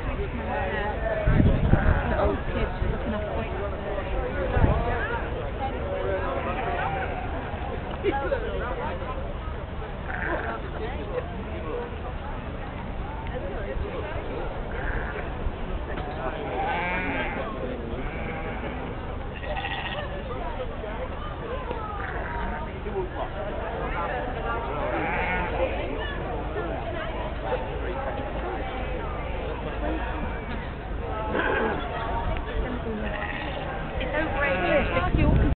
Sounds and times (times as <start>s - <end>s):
Speech: 0.0s - 35.5s
Bleat: 6.4s - 7.4s, 10.1s - 10.6s, 14.7s - 15.3s, 16.5s - 17.4s, 18.0s - 20.1s, 24.8s - 25.7s, 30.2s - 30.7s, 33.1s - 33.7s, 34.4s - 35.0s.